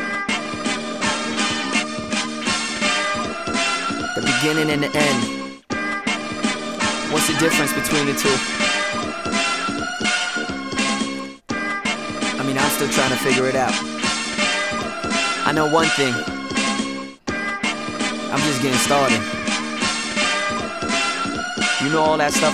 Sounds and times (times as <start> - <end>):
Music: 0.0 - 22.5
Speech: 4.2 - 5.3, 7.1 - 8.5, 12.4 - 13.8, 15.5 - 16.3, 18.3 - 19.4, 21.8 - 22.5.